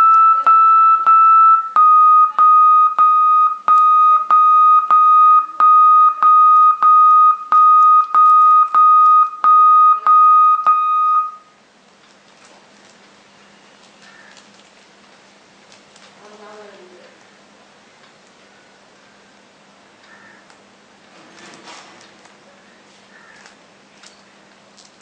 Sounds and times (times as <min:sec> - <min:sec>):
Beep, bleep: 0:00.0 - 0:11.5
Inside, small room: 0:00.0 - 0:25.0
Television: 0:11.3 - 0:25.0.